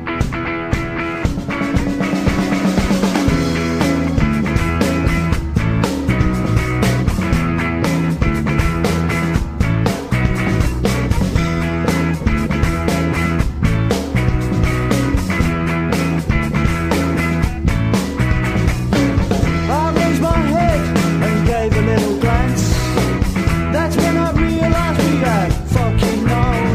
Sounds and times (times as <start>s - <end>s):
Music: 0.0s - 26.7s.